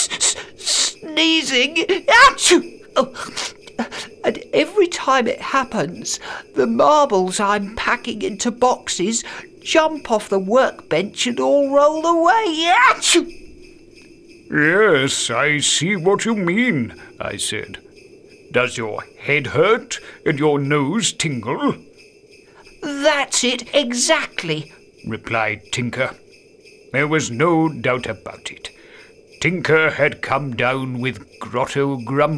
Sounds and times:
Speech: 0.0 - 3.4, 4.3 - 13.3, 14.5 - 17.8, 18.6 - 21.8, 22.8 - 26.2, 27.0 - 28.7, 29.4 - 32.3
Music: 0.0 - 32.3.

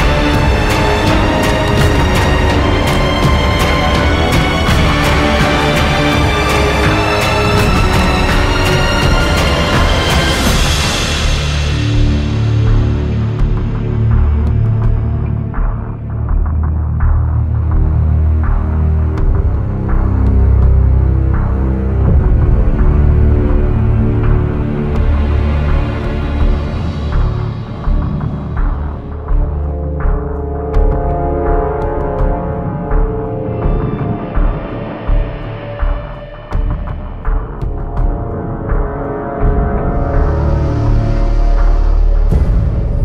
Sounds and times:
Music: 0.0 - 43.0.

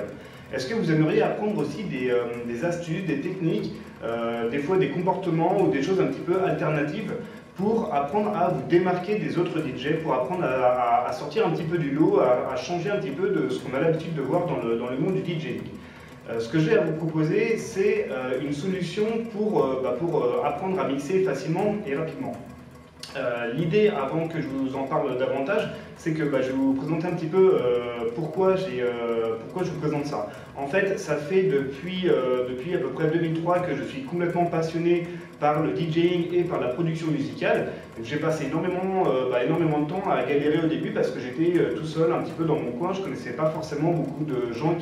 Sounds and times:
Speech: 0.0 - 44.8.

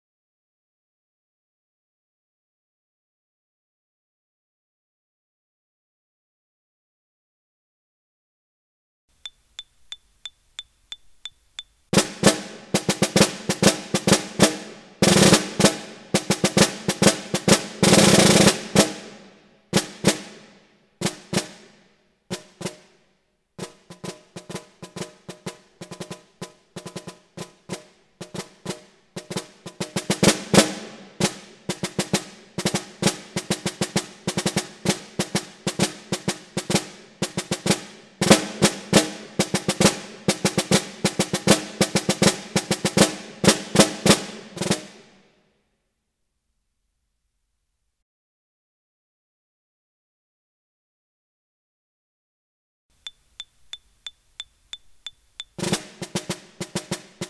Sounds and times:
Drum: 9.2 - 21.7, 22.3 - 22.8, 23.6 - 45.1, 53.0 - 57.3
Drum kit: 9.2 - 22.9, 23.6 - 45.2, 53.0 - 57.3.

